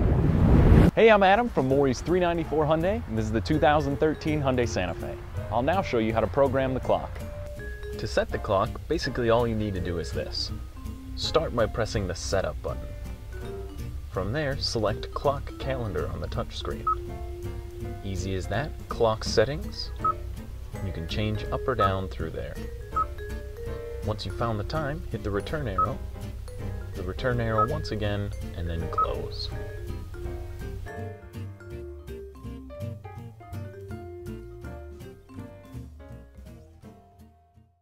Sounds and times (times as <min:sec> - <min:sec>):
Speech: 0:01.0 - 0:07.2, 0:08.0 - 0:10.6, 0:11.2 - 0:12.8, 0:14.2 - 0:16.9, 0:18.1 - 0:20.0, 0:20.8 - 0:22.6, 0:24.1 - 0:26.0, 0:27.0 - 0:29.6
Music: 0:01.0 - 0:37.8.